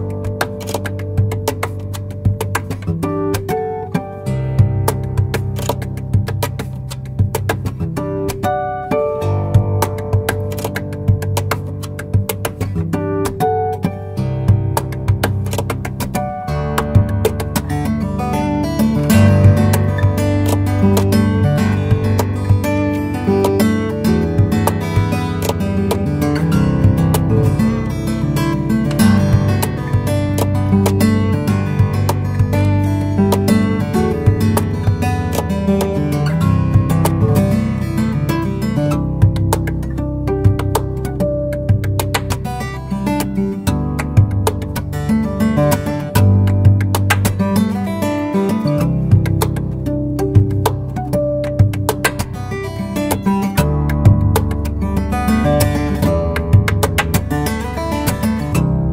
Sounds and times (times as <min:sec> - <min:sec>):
Acoustic guitar: 0:00.0 - 0:58.9
Strum: 0:00.0 - 0:58.9.